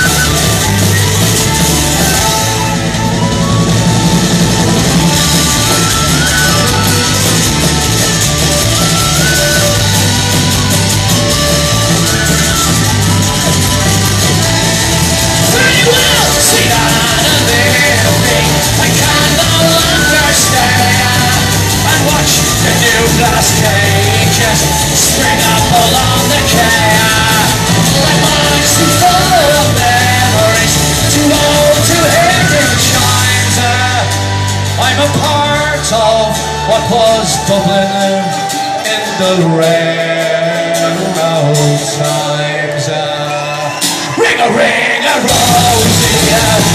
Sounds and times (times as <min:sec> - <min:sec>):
Inside, large room or hall: 0:00.0 - 0:46.7
Music: 0:00.0 - 0:46.7
Singing: 0:12.0 - 0:46.7.